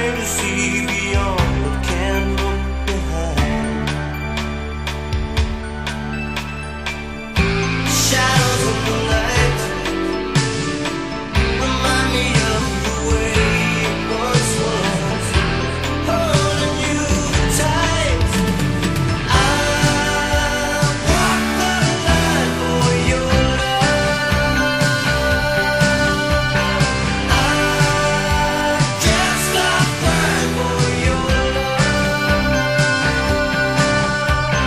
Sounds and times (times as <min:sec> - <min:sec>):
Music: 0:00.0 - 0:34.6.